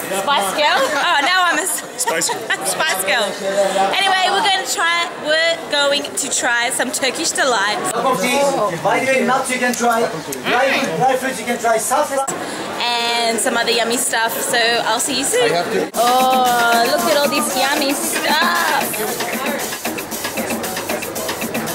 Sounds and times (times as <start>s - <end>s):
Speech: 7.0s - 19.8s.